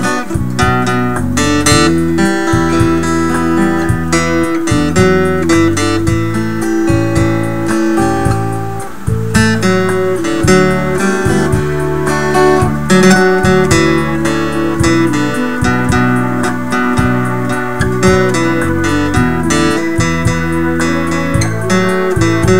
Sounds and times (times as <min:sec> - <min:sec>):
Tender music: 0:00.0 - 0:22.5.